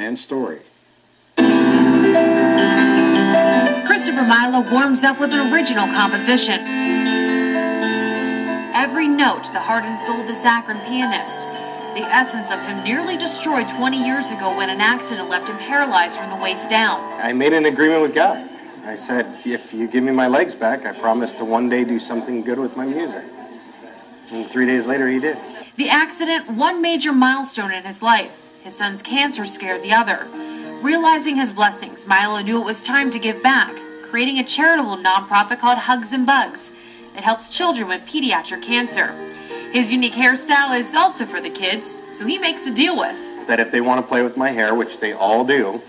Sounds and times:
Piano: 1.3s - 45.8s.

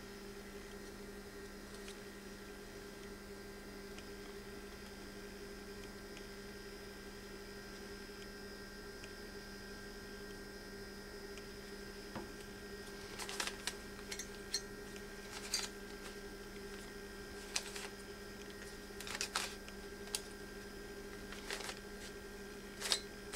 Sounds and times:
Inside, small room: 0.0s - 23.3s.

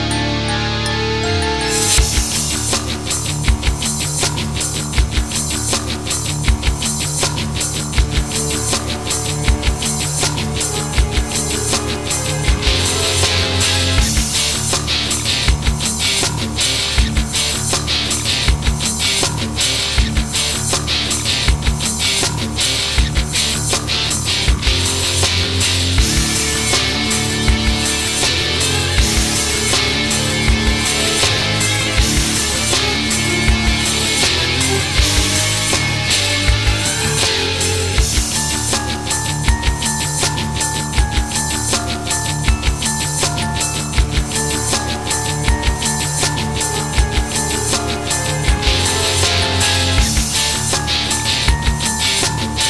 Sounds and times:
Music: 0.0s - 52.7s.

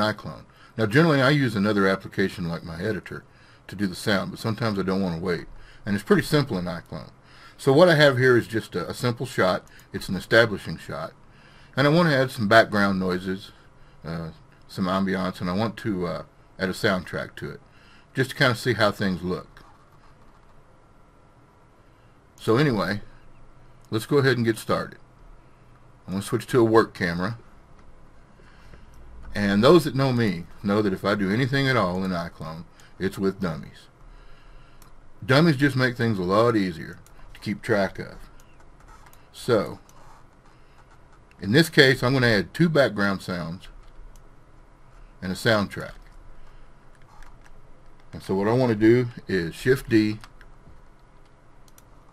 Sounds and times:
Speech: 0.0s - 11.2s, 11.8s - 17.6s, 18.2s - 19.6s, 22.4s - 23.1s, 23.9s - 25.0s, 26.1s - 27.4s, 29.3s - 33.9s, 35.2s - 38.3s, 39.3s - 39.9s, 41.4s - 43.8s, 45.2s - 46.1s, 48.1s - 50.3s.

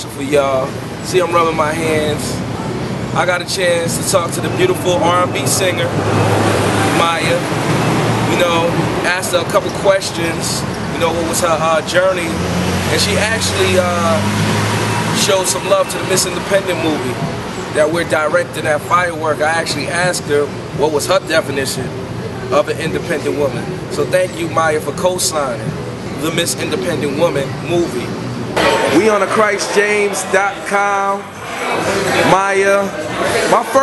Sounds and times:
Speech: 0.0s - 2.4s, 3.2s - 6.0s, 6.9s - 7.5s, 8.3s - 14.3s, 15.2s - 31.3s.

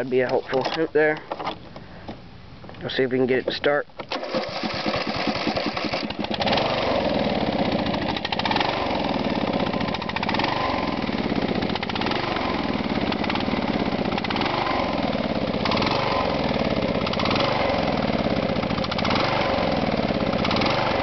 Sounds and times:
Speech: 0.0s - 1.2s, 2.8s - 3.9s
Medium engine (mid frequency): 0.0s - 21.0s
Engine starting: 4.0s - 7.1s.

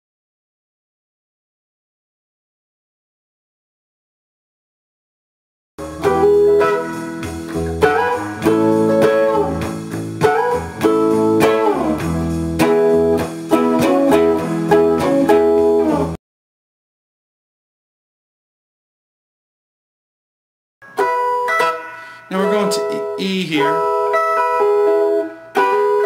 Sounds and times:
Blues: 5.8s - 16.2s, 20.9s - 26.0s
Guitar: 5.8s - 16.2s, 20.8s - 26.0s.

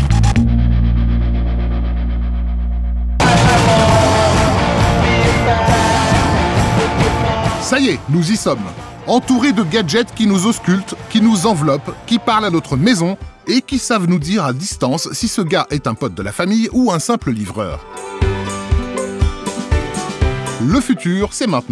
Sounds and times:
Techno: 3.2s - 21.4s
Speech: 7.6s - 17.8s, 20.6s - 21.7s.

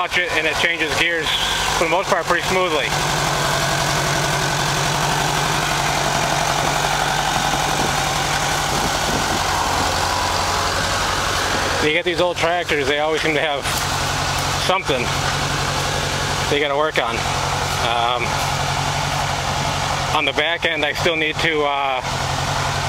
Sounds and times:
Speech: 0.0s - 3.0s, 11.8s - 13.8s, 14.6s - 15.2s, 16.4s - 18.4s, 20.1s - 22.1s
Vehicle: 0.0s - 22.8s.

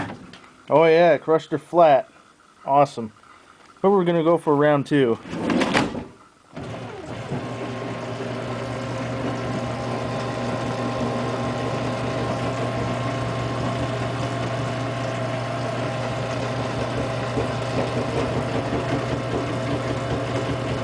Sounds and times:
Speech: 0.7s - 3.2s, 3.8s - 5.2s.

